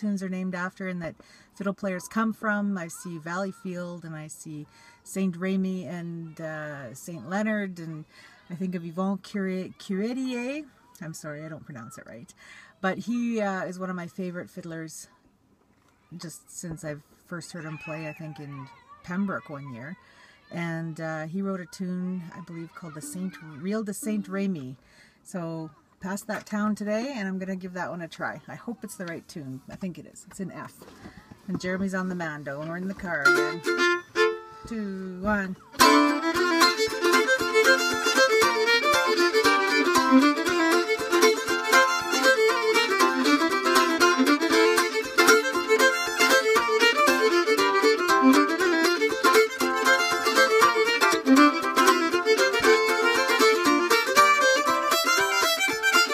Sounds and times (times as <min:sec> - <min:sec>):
Speech: 0:00.0 - 0:15.2, 0:16.1 - 0:33.6, 0:34.6 - 0:35.8.